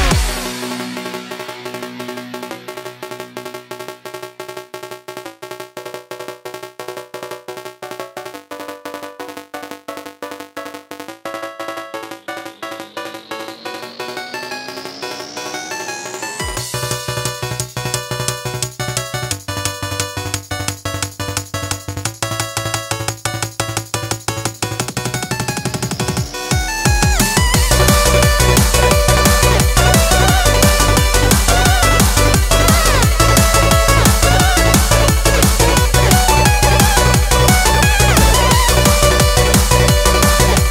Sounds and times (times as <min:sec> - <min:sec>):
Electronica: 0:00.0 - 0:40.7.